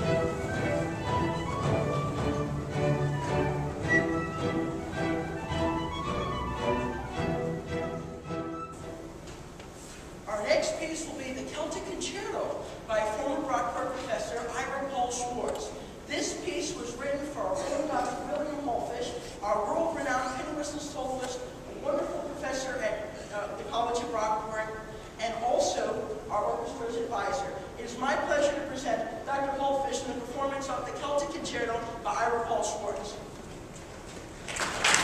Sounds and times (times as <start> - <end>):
Speech: 10.3 - 33.3.